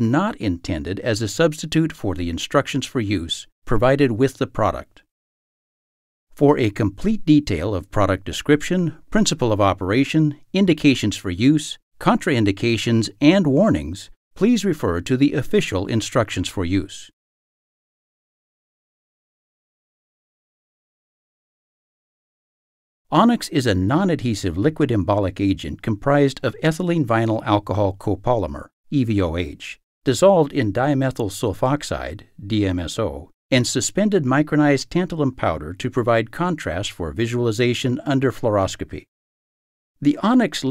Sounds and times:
Speech: 0.0s - 5.1s, 6.4s - 17.2s, 23.1s - 39.1s, 40.0s - 40.7s.

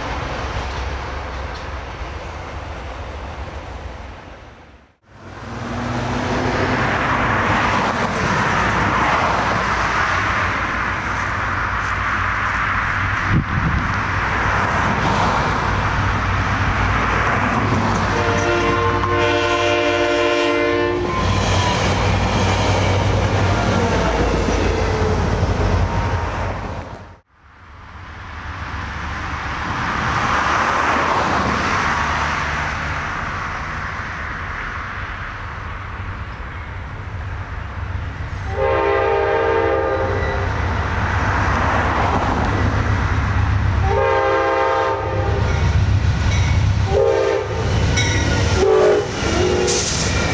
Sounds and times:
Railroad car, train wagon: 0.0s - 50.3s
Subway, metro, underground: 0.0s - 50.3s
Train horn: 18.0s - 21.3s, 38.4s - 40.5s, 43.8s - 45.6s, 46.8s - 47.7s, 48.6s - 50.0s.

